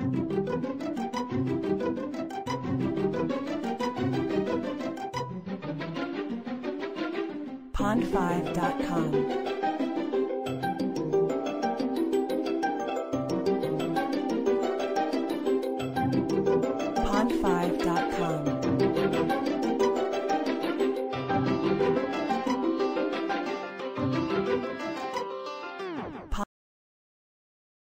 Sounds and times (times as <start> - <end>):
Funny music: 0.0 - 26.4.